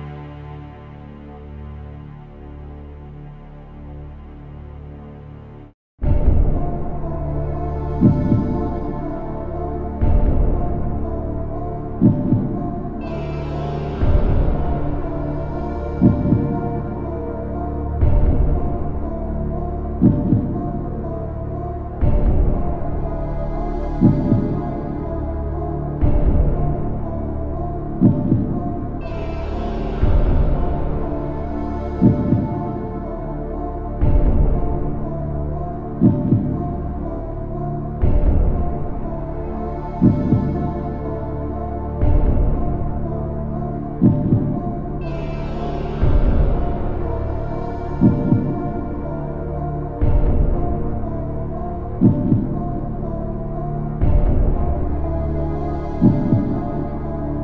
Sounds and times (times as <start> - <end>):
Scary music: 0.0 - 57.4.